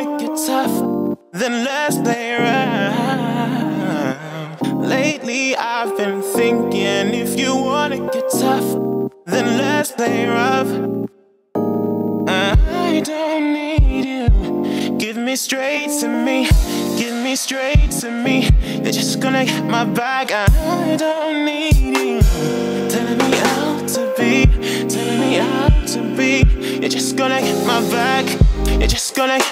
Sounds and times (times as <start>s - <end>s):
Music: 0.0s - 29.5s.